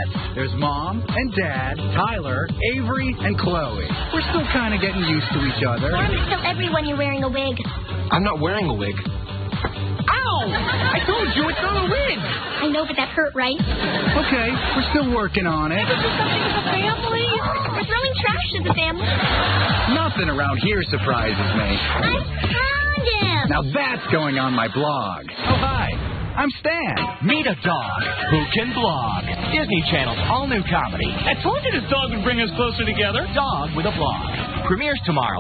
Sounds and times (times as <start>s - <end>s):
Music: 0.0s - 35.4s.